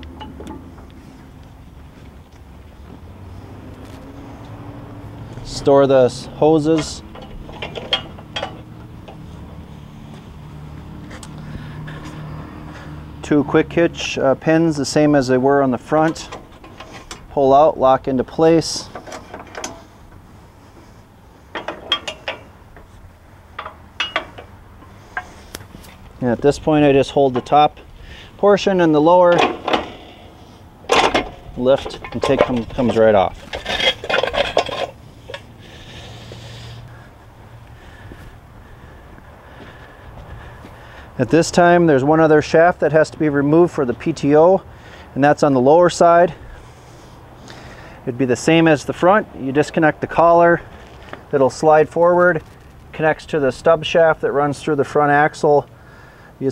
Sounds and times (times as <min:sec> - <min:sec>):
Vehicle: 0:00.0 - 0:56.5
Speech: 0:05.4 - 0:07.1, 0:13.2 - 0:16.3, 0:17.3 - 0:18.9, 0:26.2 - 0:27.8, 0:28.4 - 0:29.5, 0:31.6 - 0:33.4, 0:41.2 - 0:44.6, 0:45.2 - 0:46.4, 0:48.0 - 0:50.7, 0:51.3 - 0:55.7.